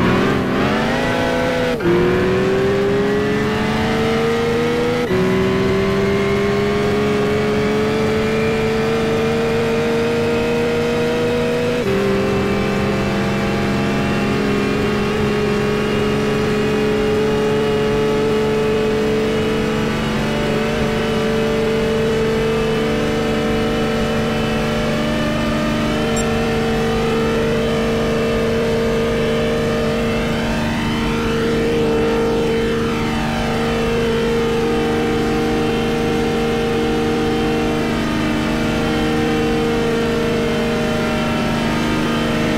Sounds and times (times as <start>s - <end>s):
Car: 0.0s - 42.5s.